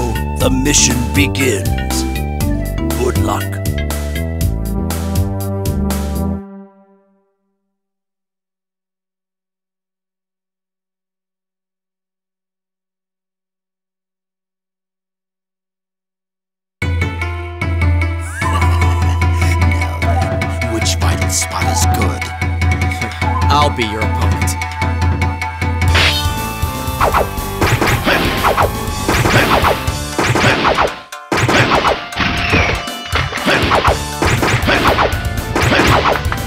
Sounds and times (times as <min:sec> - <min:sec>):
Speech: 0:00.0 - 0:02.1, 0:03.0 - 0:03.6, 0:20.6 - 0:22.3, 0:23.4 - 0:24.6
Video game music: 0:00.0 - 0:07.4, 0:16.8 - 0:36.4.